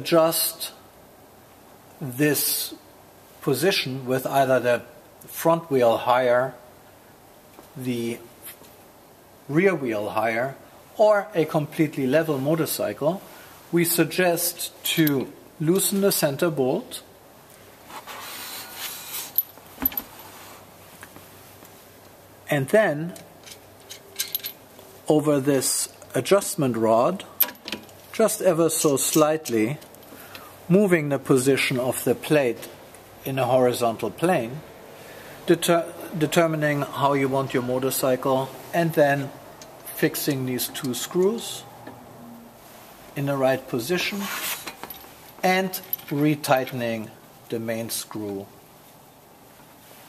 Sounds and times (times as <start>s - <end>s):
Speech: 0.0s - 0.8s, 2.0s - 2.8s, 3.4s - 6.6s, 7.8s - 8.6s, 9.5s - 17.1s, 22.5s - 23.3s, 25.0s - 27.3s, 28.2s - 29.9s, 30.7s - 34.6s, 35.5s - 41.7s, 43.2s - 44.4s, 45.4s - 48.6s.